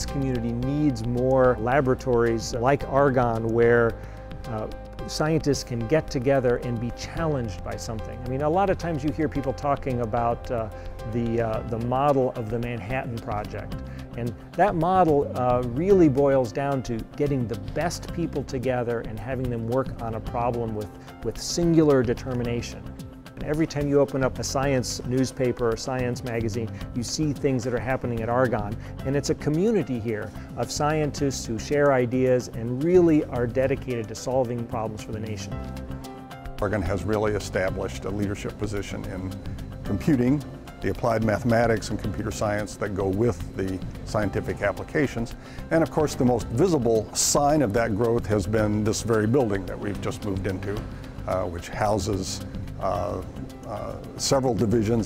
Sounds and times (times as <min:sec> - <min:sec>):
Speech: 0:00.0 - 0:22.8, 0:23.4 - 0:35.5, 0:36.6 - 0:55.0
Music: 0:00.0 - 0:55.0.